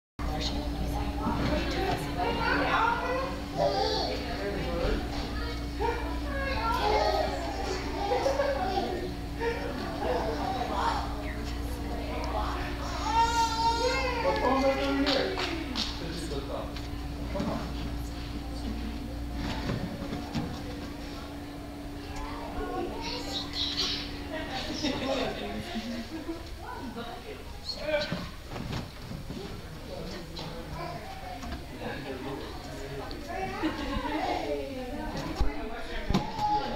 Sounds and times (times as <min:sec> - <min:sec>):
Child speech, kid speaking: 0:00.2 - 0:15.7, 0:22.0 - 0:25.2, 0:30.7 - 0:36.7
Inside, large room or hall: 0:00.2 - 0:36.7.